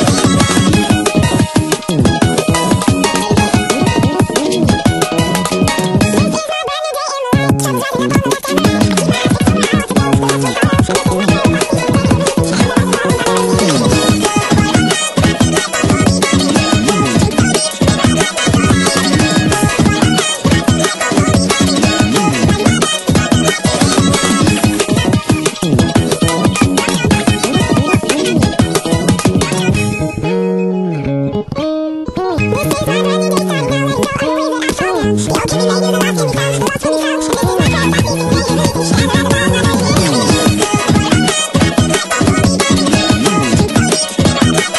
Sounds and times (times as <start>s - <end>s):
Bass guitar: 0.0s - 6.4s, 7.4s - 44.7s.